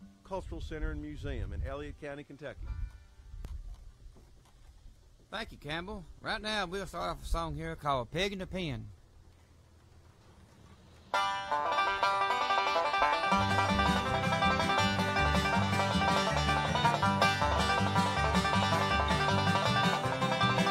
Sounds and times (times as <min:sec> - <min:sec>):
Music: 0:11.2 - 0:20.7.